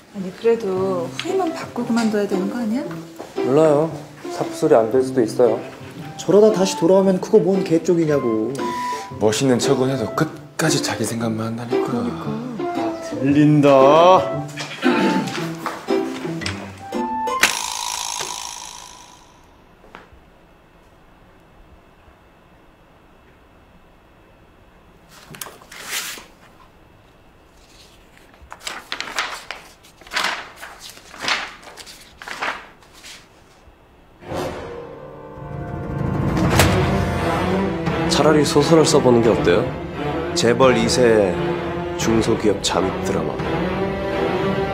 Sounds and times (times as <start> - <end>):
Music: 0.2 - 17.6, 34.2 - 44.7.